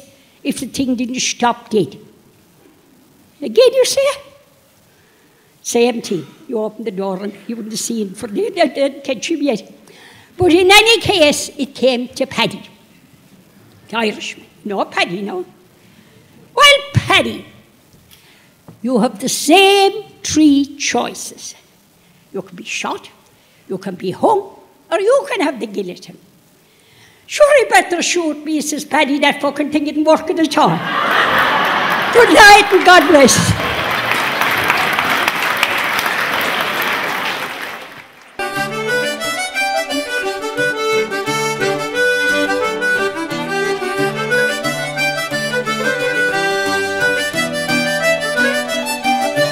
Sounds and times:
Accordion: 38.4s - 49.5s.

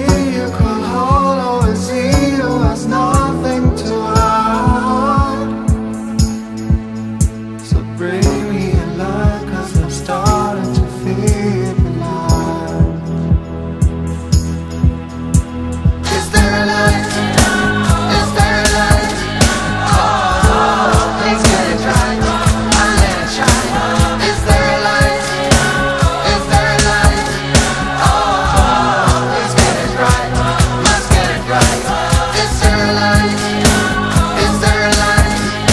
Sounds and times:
Singing: 0.0s - 5.8s, 7.6s - 13.1s, 16.0s - 35.7s
Soul music: 0.0s - 35.7s.

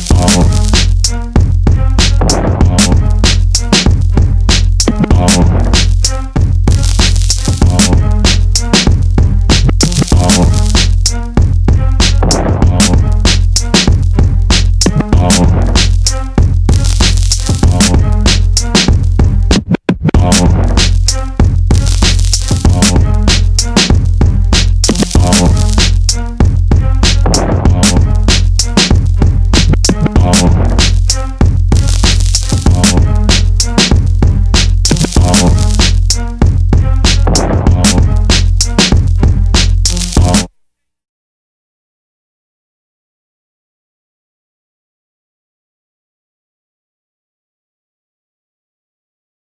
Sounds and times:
Music: 0.0s - 40.6s.

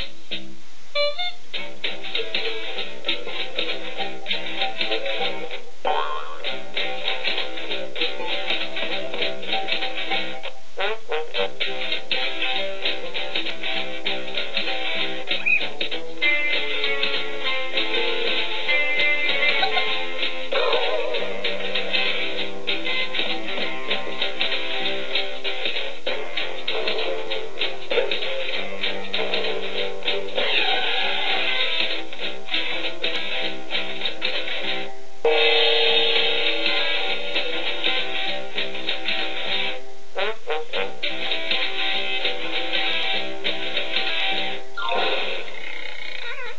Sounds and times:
Music: 0.0s - 46.5s.

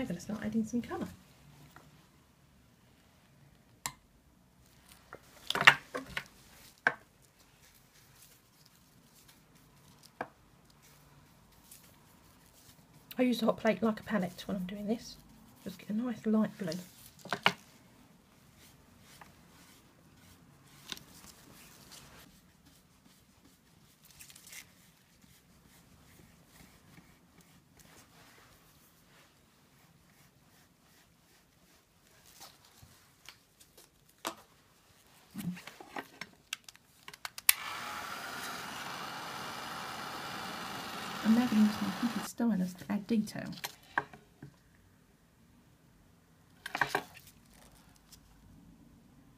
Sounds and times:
Speech: 0.0s - 1.2s, 13.1s - 16.9s, 41.2s - 43.6s
Inside, small room: 0.0s - 49.3s.

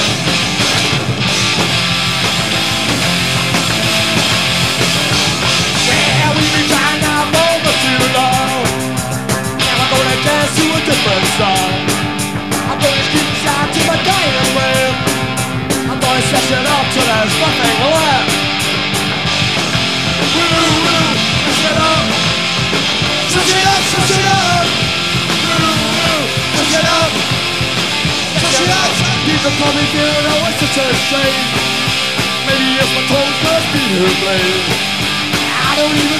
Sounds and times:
Music: 0.0s - 36.2s.

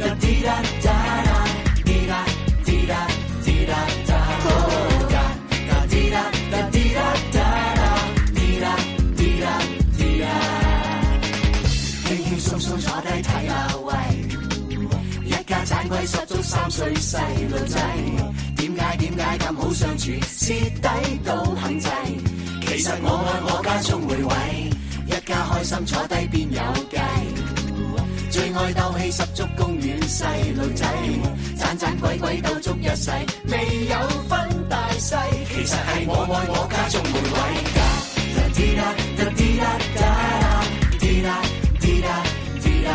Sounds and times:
House music: 0.0s - 42.9s.

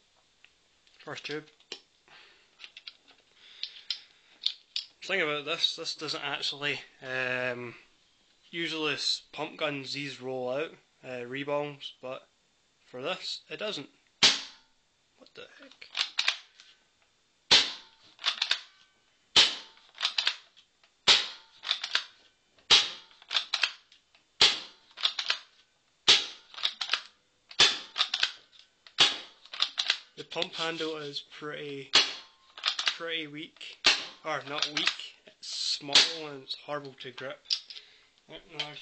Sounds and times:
Speech: 1.0s - 1.5s, 5.0s - 7.8s, 8.5s - 12.3s, 12.9s - 14.0s, 15.2s - 15.8s, 30.2s - 32.0s, 33.0s - 37.5s, 38.3s - 38.8s.

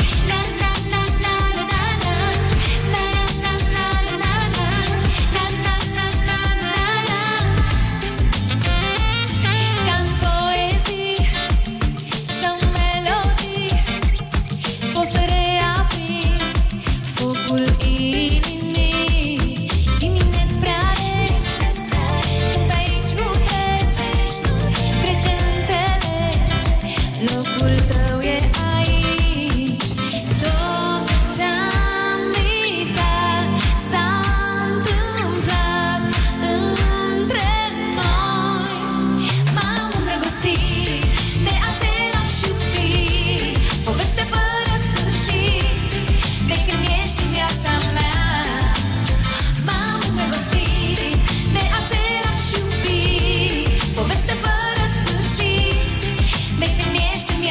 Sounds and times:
Music: 0.0s - 57.5s.

